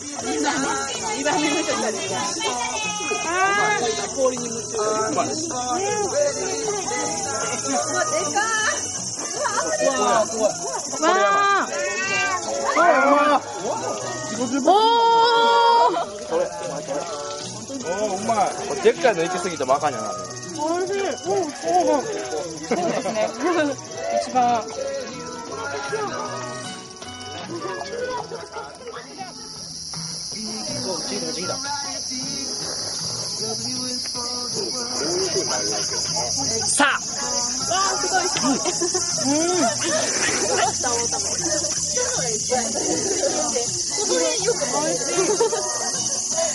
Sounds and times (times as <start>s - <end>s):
Crowd: 0.0s - 46.5s.